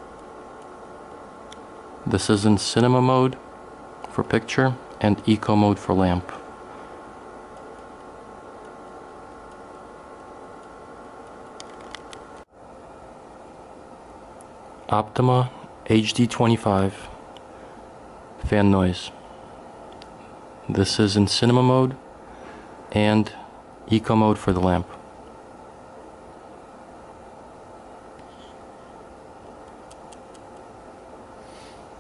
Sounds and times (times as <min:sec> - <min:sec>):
White noise: 0:00.0 - 0:32.0
Speech: 0:02.0 - 0:03.4, 0:04.1 - 0:06.5, 0:14.9 - 0:17.2, 0:18.4 - 0:19.2, 0:20.7 - 0:22.0, 0:22.9 - 0:25.0.